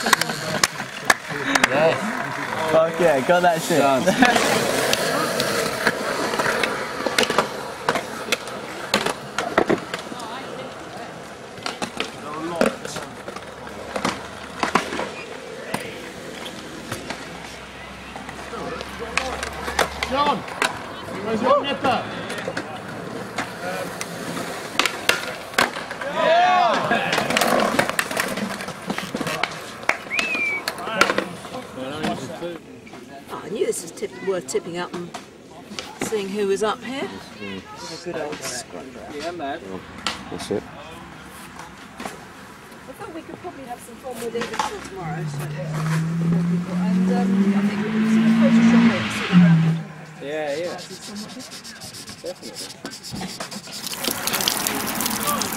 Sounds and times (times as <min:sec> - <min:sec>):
Skateboard: 0:00.0 - 0:33.1, 0:41.4 - 0:46.1, 0:50.2 - 0:55.5.